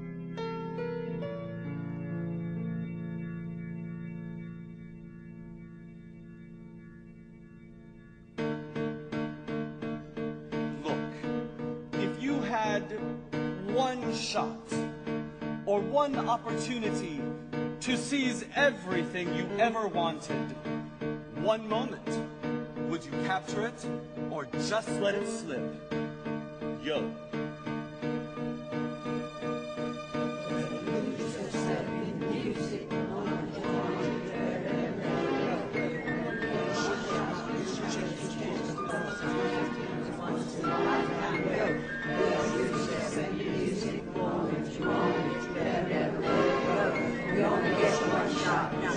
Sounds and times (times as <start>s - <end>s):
Music: 0.0s - 48.9s
Speech: 12.0s - 13.0s, 13.6s - 14.8s, 15.7s - 17.2s, 17.8s - 20.4s, 21.4s - 22.2s, 22.9s - 25.8s, 26.8s - 27.1s.